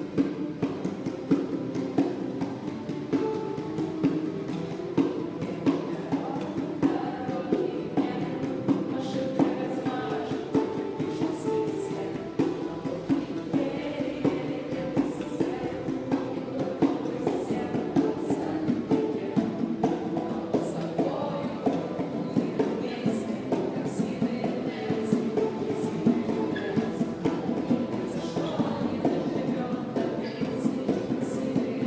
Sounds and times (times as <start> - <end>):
Ukulele: 0.0 - 31.8.